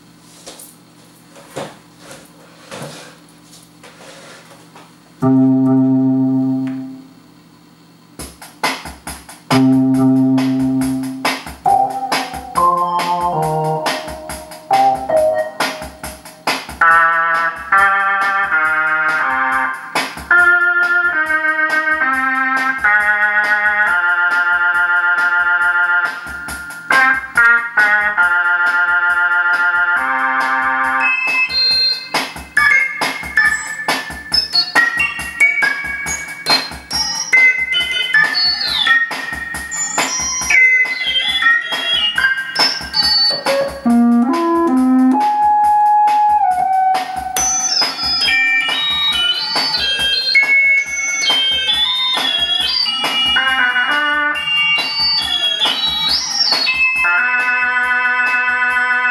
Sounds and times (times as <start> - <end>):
Keyboard (musical): 5.2 - 7.2, 9.5 - 59.1.